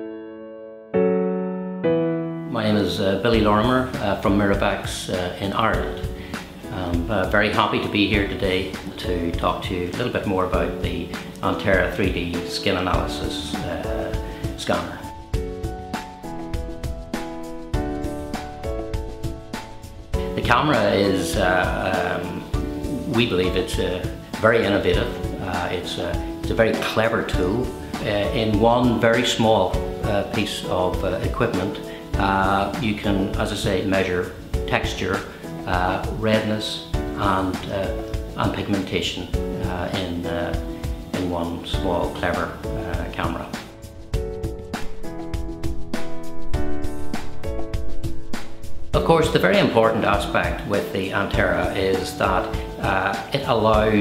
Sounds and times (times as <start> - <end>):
Music: 0.0 - 54.0
Speech: 2.5 - 6.1, 6.7 - 15.1, 20.3 - 43.7, 49.0 - 54.0.